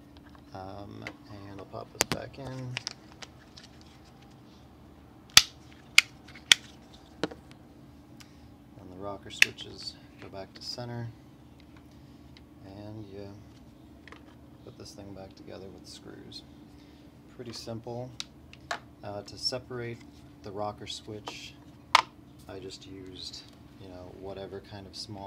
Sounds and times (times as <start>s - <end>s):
Speech: 0.5s - 2.8s, 8.8s - 11.2s, 12.6s - 13.5s, 14.6s - 16.5s, 17.3s - 18.2s, 19.0s - 21.6s, 22.4s - 25.2s.